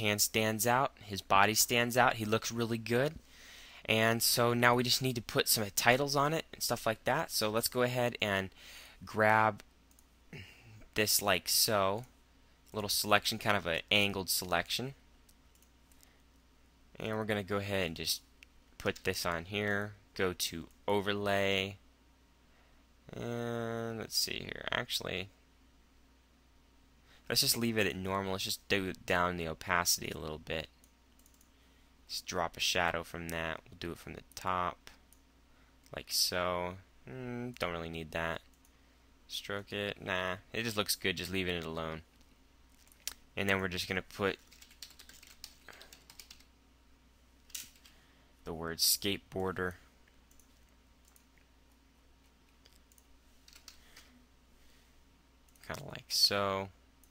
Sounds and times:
Speech: 0.0s - 3.2s, 3.9s - 9.6s, 11.0s - 12.1s, 12.7s - 15.0s, 17.0s - 21.8s, 23.1s - 25.4s, 27.3s - 30.7s, 32.1s - 35.0s, 35.9s - 38.5s, 39.3s - 42.1s, 43.4s - 44.4s, 48.4s - 49.9s, 55.6s - 56.8s
Computer keyboard: 31.2s - 31.5s, 44.4s - 46.5s, 52.6s - 53.8s.

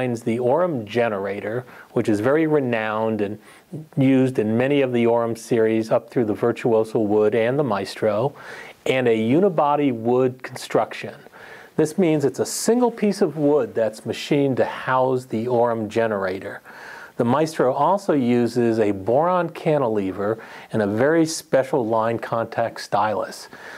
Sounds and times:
Speech: 0.0s - 23.5s.

